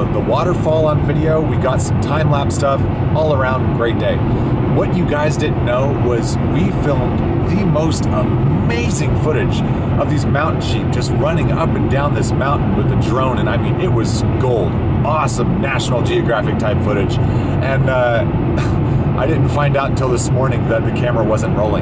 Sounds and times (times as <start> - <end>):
Speech: 0.0 - 4.2, 4.8 - 18.3, 19.2 - 21.8.